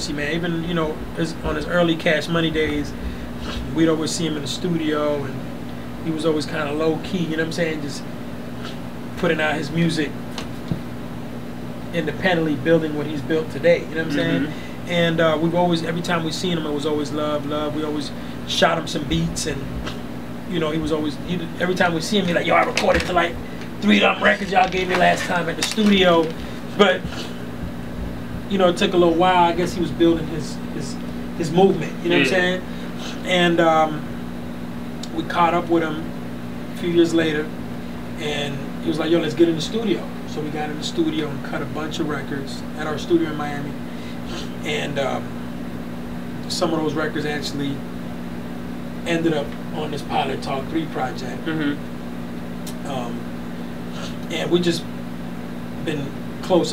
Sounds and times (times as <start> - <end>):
Speech: 0.0 - 5.4, 6.0 - 8.0, 9.2 - 10.2, 11.9 - 19.8, 20.5 - 27.3, 28.5 - 34.1, 35.0 - 36.1, 36.8 - 37.6, 38.2 - 45.3, 46.4 - 47.8, 49.0 - 51.8, 52.7 - 53.2, 54.0 - 54.9, 55.8 - 56.7
Inside, small room: 0.0 - 56.7.